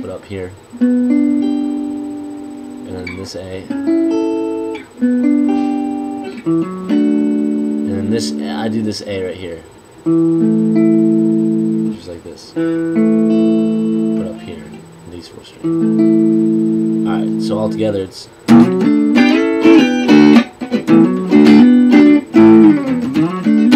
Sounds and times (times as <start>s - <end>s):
Speech: 0.0s - 0.6s, 2.9s - 3.7s, 7.9s - 9.7s, 11.9s - 12.6s, 14.2s - 15.6s, 17.0s - 18.4s.